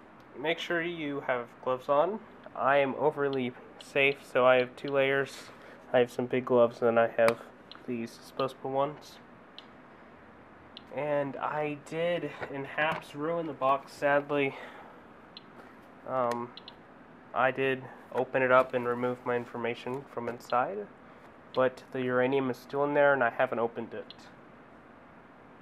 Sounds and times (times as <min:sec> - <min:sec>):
Speech: 0:00.4 - 0:09.3, 0:10.9 - 0:14.6, 0:16.1 - 0:16.6, 0:17.4 - 0:20.9, 0:21.6 - 0:24.4.